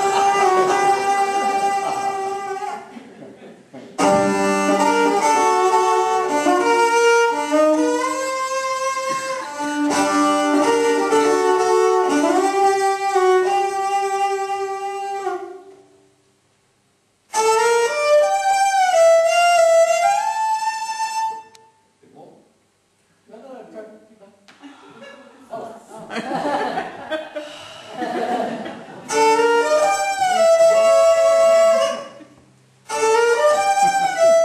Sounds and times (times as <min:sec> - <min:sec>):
Violin, fiddle: 0:00.0 - 0:02.9, 0:04.0 - 0:15.8, 0:17.3 - 0:21.6, 0:29.1 - 0:32.2, 0:32.9 - 0:34.4
Speech: 0:22.0 - 0:22.6, 0:23.3 - 0:24.5.